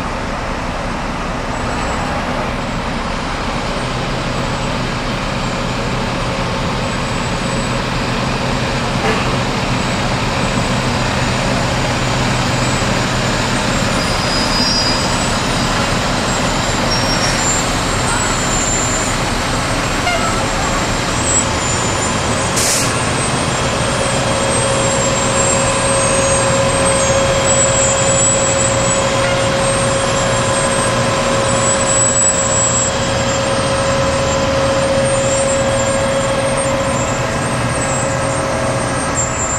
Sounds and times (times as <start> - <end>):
Heavy engine (low frequency): 0.0 - 39.5.